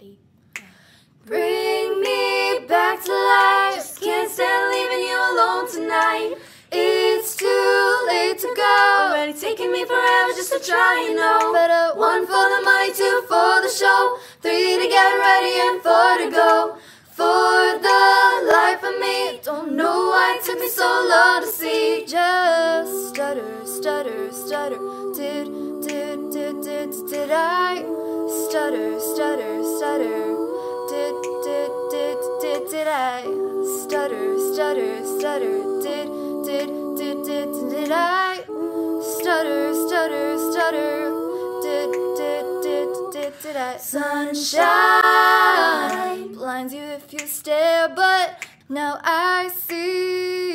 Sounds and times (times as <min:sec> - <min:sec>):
Choir: 0:01.2 - 0:50.5.